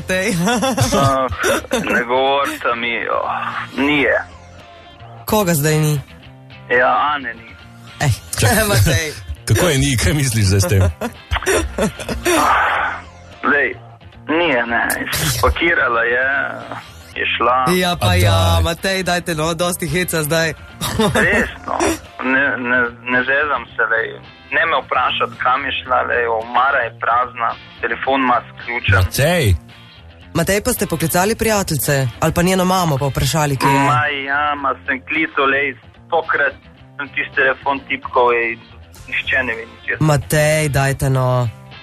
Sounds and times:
Music: 0.0s - 41.8s.

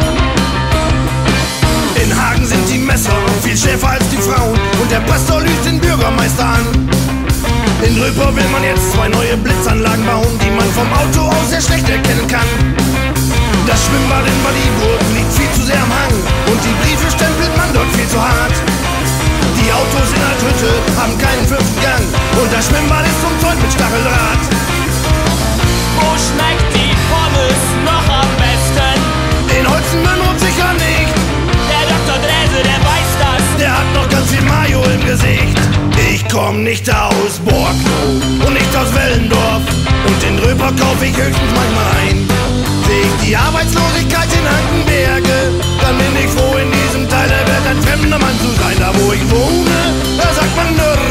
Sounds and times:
Music: 0.0s - 51.1s.

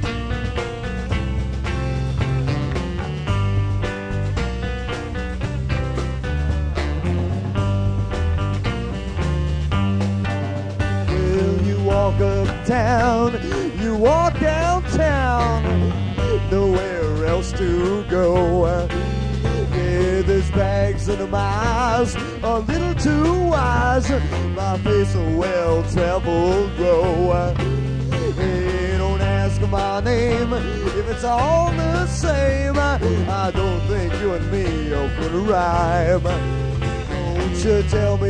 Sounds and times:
Music: 0.0s - 38.2s.

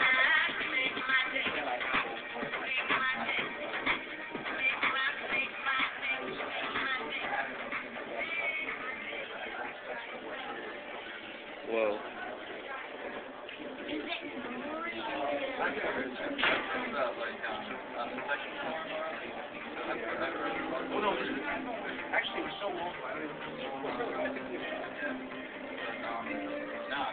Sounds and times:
Speech: 11.6s - 27.1s.

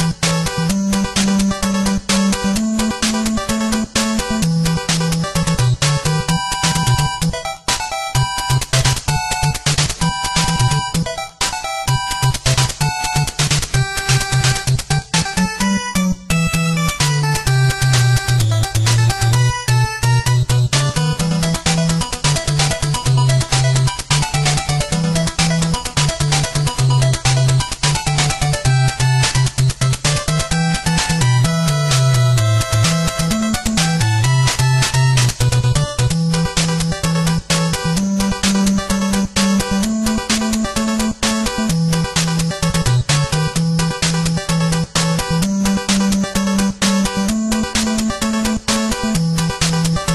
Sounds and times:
Video game music: 0.0s - 50.1s.

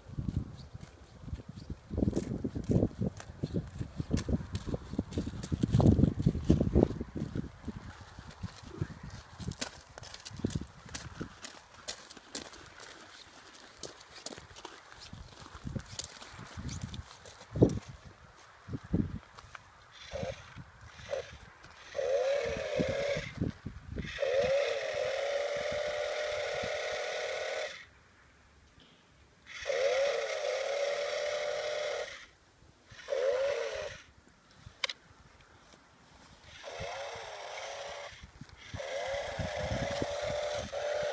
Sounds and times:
Chainsaw: 20.0s - 23.4s, 24.0s - 27.9s, 29.5s - 32.3s, 32.9s - 34.1s, 36.5s - 41.1s.

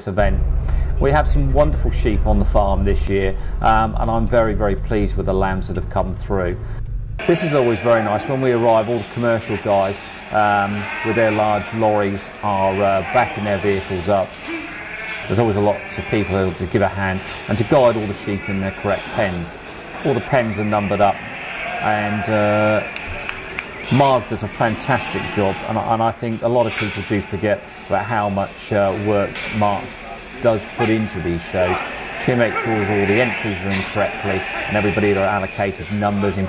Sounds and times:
Speech: 0.0s - 0.4s, 1.0s - 6.6s, 7.2s - 14.6s, 15.3s - 22.9s, 23.9s - 36.4s
Bleat: 10.4s - 11.4s, 14.4s - 16.5s, 21.0s - 23.2s, 31.7s - 35.5s.

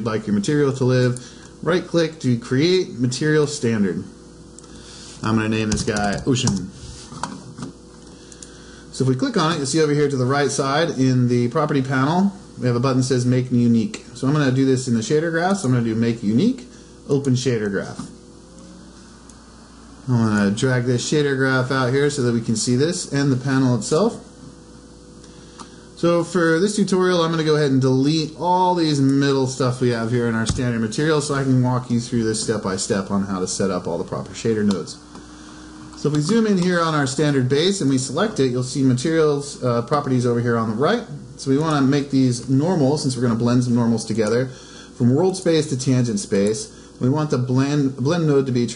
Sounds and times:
Speech: 0.0s - 4.2s, 5.2s - 6.8s, 8.9s - 18.2s, 20.1s - 24.3s, 26.0s - 35.0s, 36.0s - 48.7s.

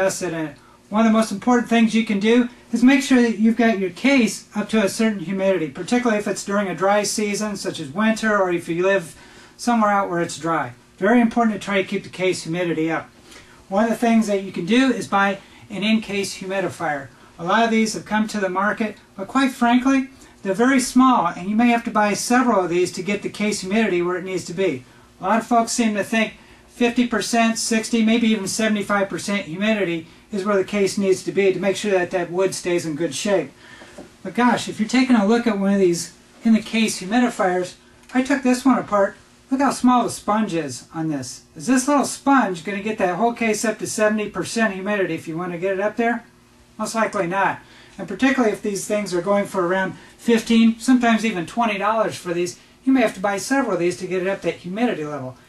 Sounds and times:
Speech: 0.0s - 13.1s, 13.7s - 33.6s, 34.2s - 55.4s.

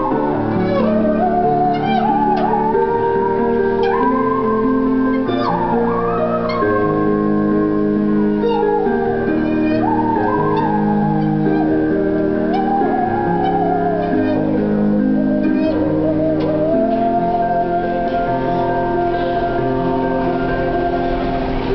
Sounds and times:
Music: 0.0s - 21.7s.

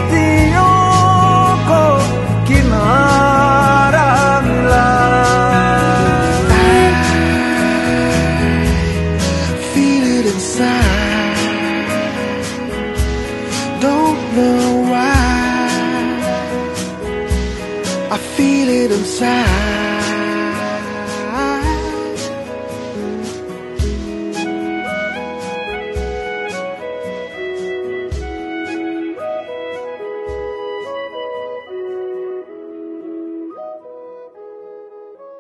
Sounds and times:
Music: 0.0s - 35.4s.

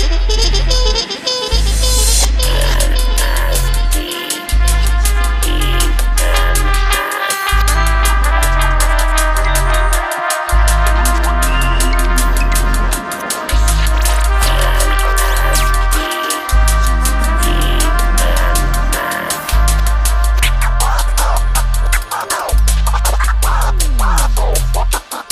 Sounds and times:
Music: 0.0s - 25.3s.

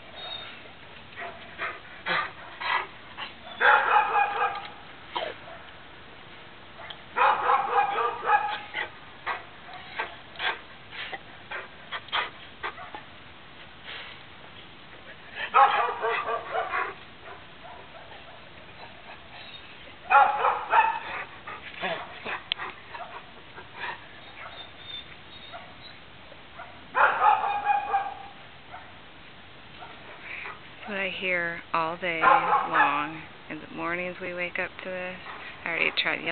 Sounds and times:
Bow-wow: 3.6s - 5.7s, 6.8s - 10.2s, 15.5s - 18.4s, 20.1s - 21.2s, 26.6s - 28.9s, 32.2s - 33.1s.

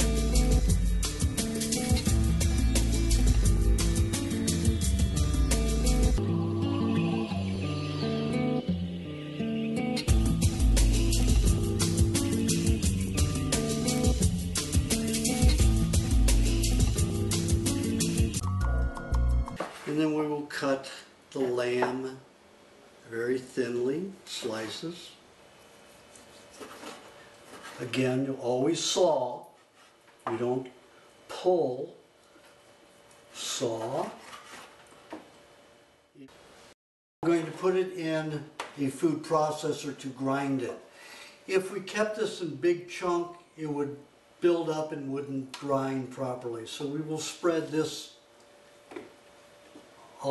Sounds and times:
Speech: 19.9s - 22.3s, 23.1s - 25.2s, 27.8s - 29.6s, 30.3s - 32.0s, 33.4s - 34.2s, 37.2s - 40.9s, 41.5s - 48.2s.

